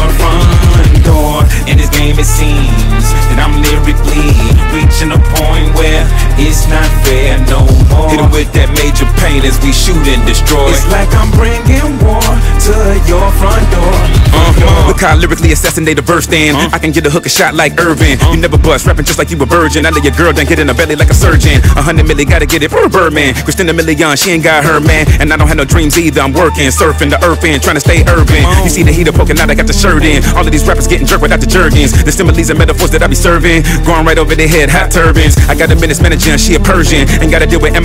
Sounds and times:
Music: 0.0 - 37.8.

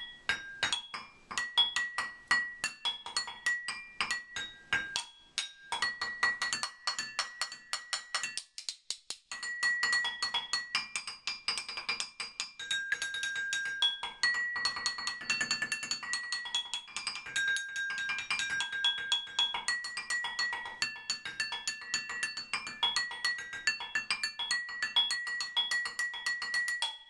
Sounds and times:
Chink, clink: 0.0 - 8.4, 9.3 - 27.1
Percussion: 0.0 - 27.1.

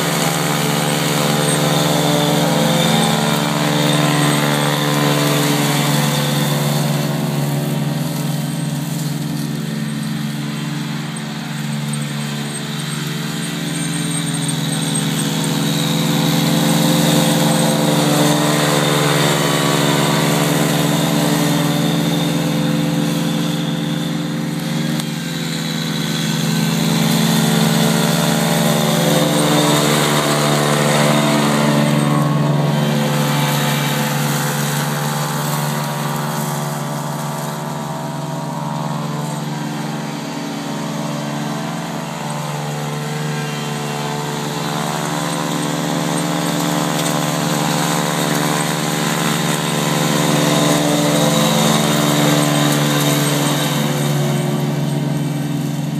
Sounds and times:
Lawn mower: 0.0 - 55.9
Vehicle: 0.0 - 55.9.

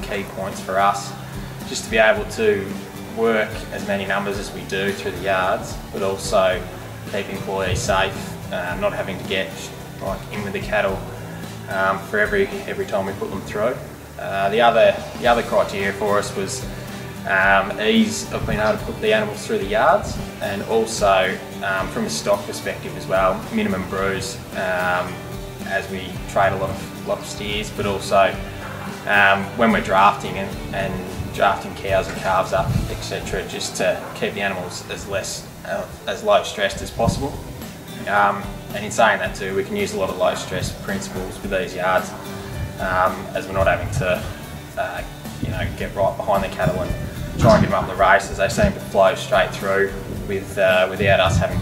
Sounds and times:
Speech: 0.0 - 37.4, 38.0 - 51.6
Music: 0.0 - 51.6.

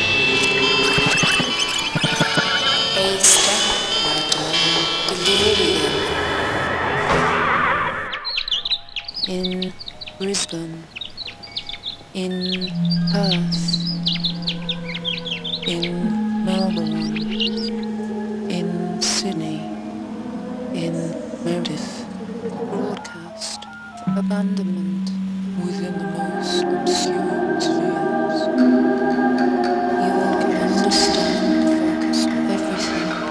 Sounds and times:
Music: 0.0 - 6.8, 8.5 - 33.3
Speech: 3.0 - 6.2, 9.3 - 10.9, 12.2 - 13.8, 15.6 - 17.2, 18.5 - 19.7, 20.7 - 28.5, 30.0 - 33.3
Outside, rural or natural: 7.3 - 18.5.

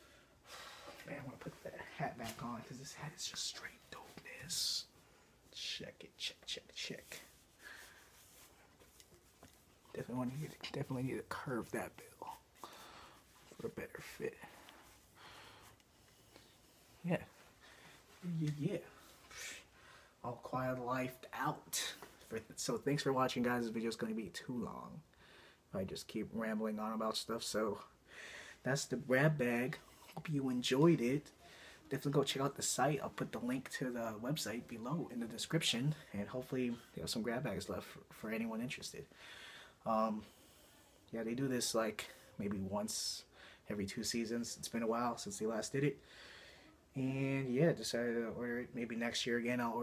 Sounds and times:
Inside, small room: 0.0 - 49.8
Speech: 1.0 - 4.9, 5.5 - 7.3, 9.9 - 12.5, 13.5 - 14.6, 17.0 - 17.4, 18.2 - 19.5, 20.2 - 25.1, 25.7 - 28.0, 28.6 - 39.1, 39.8 - 40.3, 41.1 - 46.0, 46.9 - 49.8.

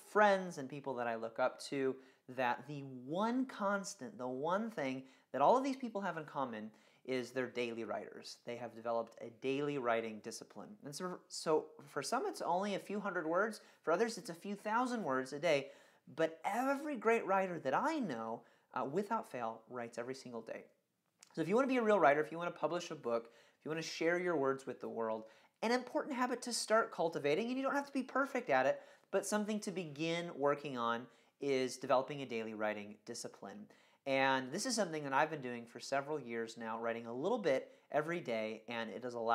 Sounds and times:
Speech: 0.0 - 39.3.

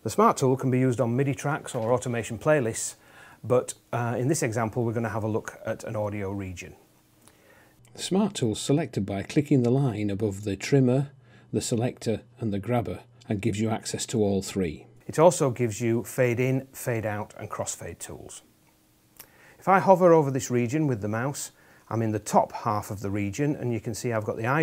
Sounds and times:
Speech: 0.0 - 6.8, 7.9 - 18.5, 19.6 - 24.6.

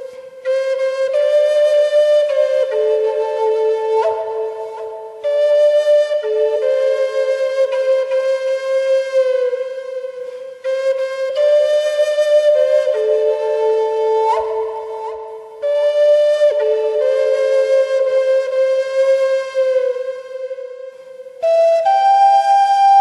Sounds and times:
Flute: 0.0 - 23.0.

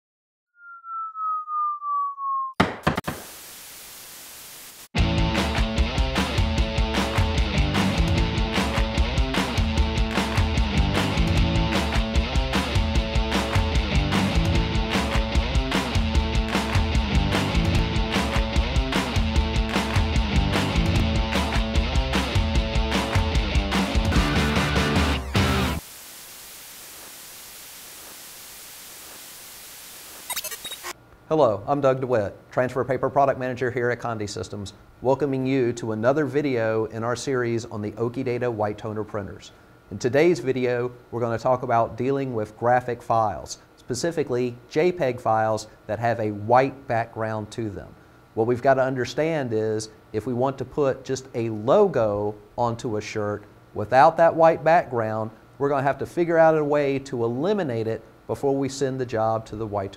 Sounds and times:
Music: 5.0 - 25.8.

